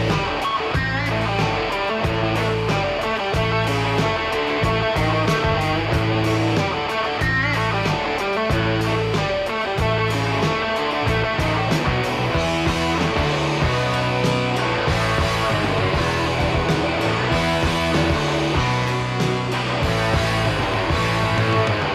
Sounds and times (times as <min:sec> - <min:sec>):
Music: 0:00.0 - 0:21.9.